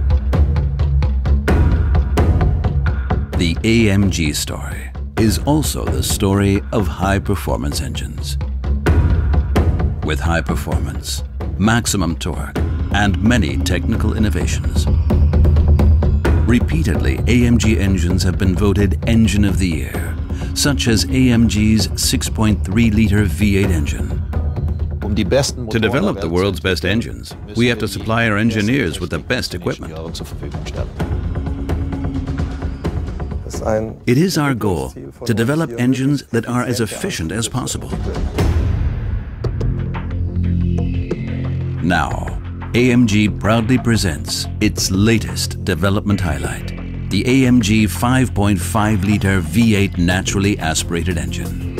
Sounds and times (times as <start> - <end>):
Music: 0.0 - 51.7
Speech: 3.4 - 8.4, 10.0 - 14.9, 16.5 - 24.2, 25.0 - 31.0, 33.5 - 38.4, 41.8 - 51.5.